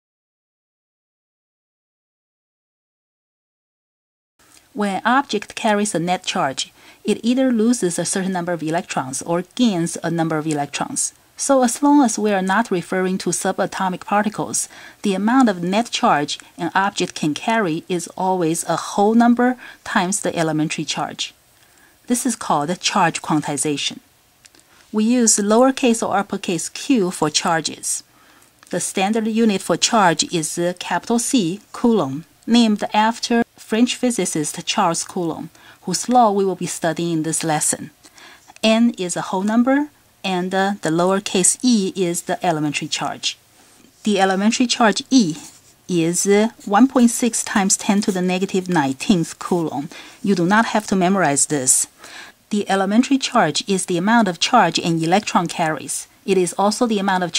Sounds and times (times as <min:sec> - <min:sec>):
Speech: 0:04.7 - 0:21.4, 0:22.1 - 0:24.0, 0:24.9 - 0:28.1, 0:28.7 - 0:43.4, 0:44.0 - 0:57.3.